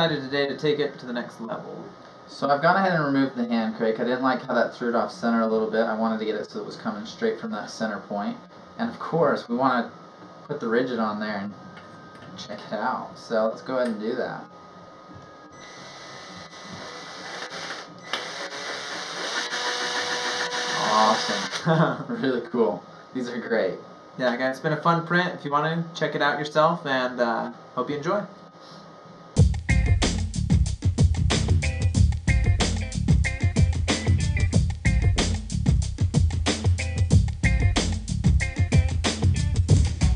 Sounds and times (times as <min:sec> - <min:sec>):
Power tool: 0:15.6 - 0:21.7.